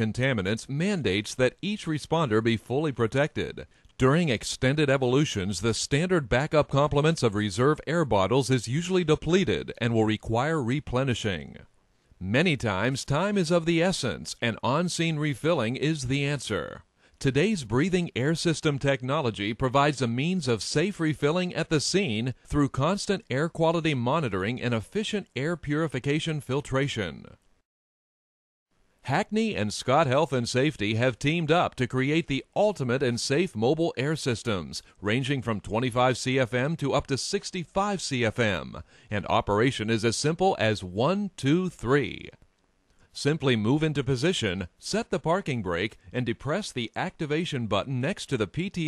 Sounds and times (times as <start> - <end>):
Speech: 0.0 - 27.4, 29.1 - 42.4, 43.2 - 48.8.